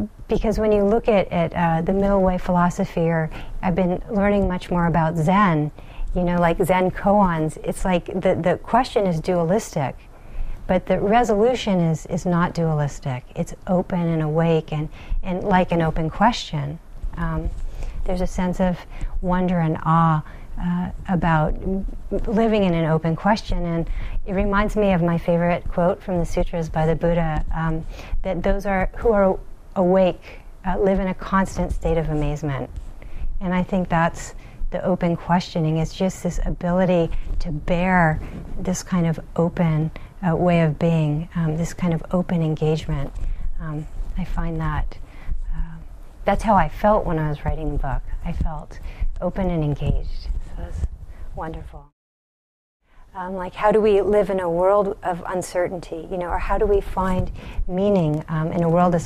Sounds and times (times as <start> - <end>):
Speech: 0.0 - 10.0, 10.7 - 32.7, 33.4 - 51.9, 53.2 - 59.0.